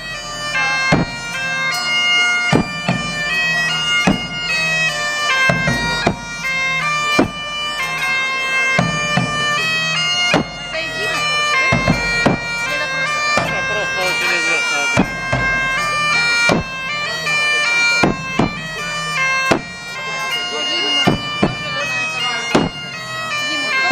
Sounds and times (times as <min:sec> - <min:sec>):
Bagpipes: 0:00.0 - 0:23.9
Speech: 0:12.7 - 0:15.0, 0:20.0 - 0:22.7.